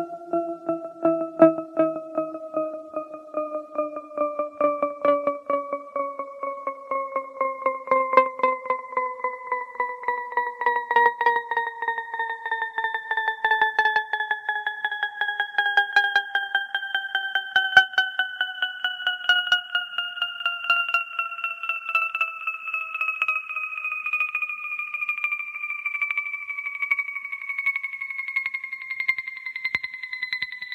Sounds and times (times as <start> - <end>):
Music: 0.0 - 30.7.